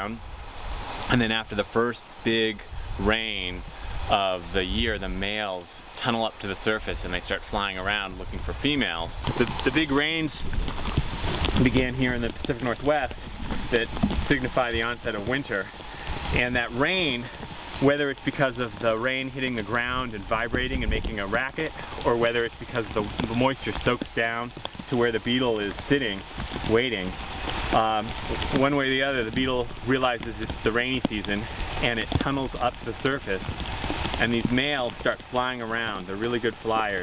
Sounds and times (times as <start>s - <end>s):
Rain on surface: 0.0s - 37.0s
Raindrop: 0.0s - 37.0s.